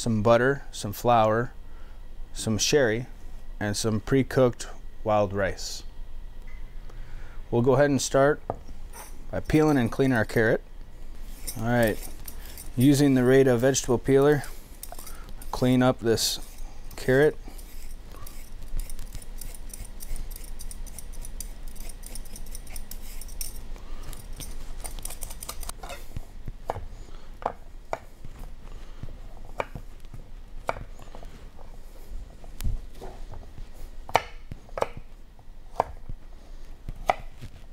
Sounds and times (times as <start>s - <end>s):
Speech: 0.0s - 1.6s, 2.4s - 5.9s, 7.5s - 8.4s, 9.3s - 10.6s, 11.6s - 12.0s, 12.8s - 14.5s, 15.5s - 17.4s.